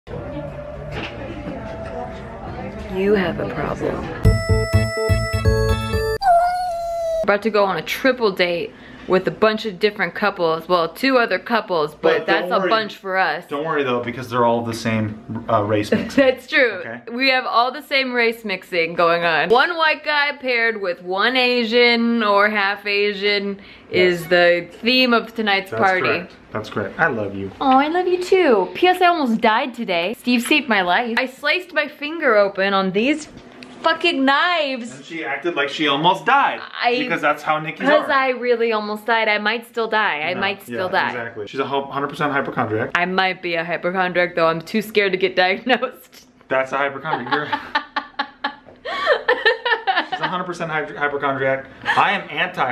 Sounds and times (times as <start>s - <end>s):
Music: 0.1s - 6.3s.